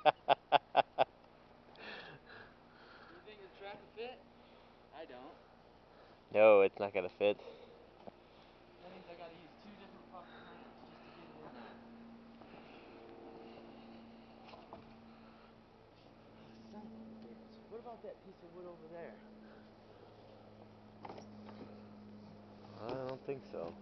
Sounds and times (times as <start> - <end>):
Outside, rural or natural: 0.0 - 23.8.